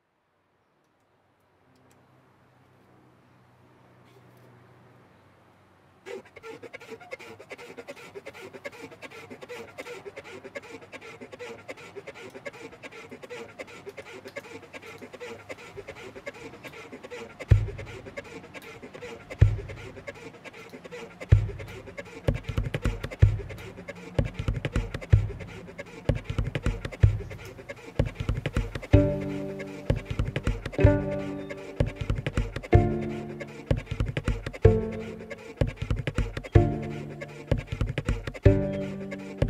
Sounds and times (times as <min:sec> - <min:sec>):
Music: 0:29.0 - 0:30.2, 0:30.8 - 0:33.9, 0:34.6 - 0:35.4, 0:36.5 - 0:37.5, 0:38.5 - 0:39.5.